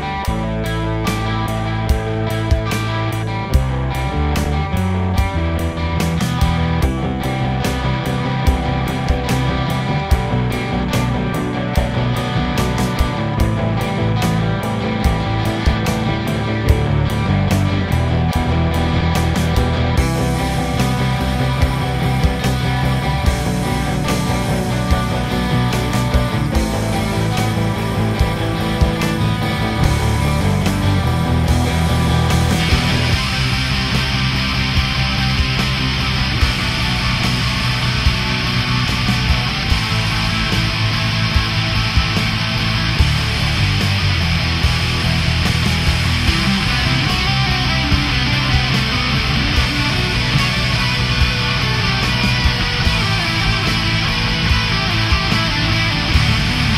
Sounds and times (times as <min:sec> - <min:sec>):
Music: 0:00.0 - 0:56.7.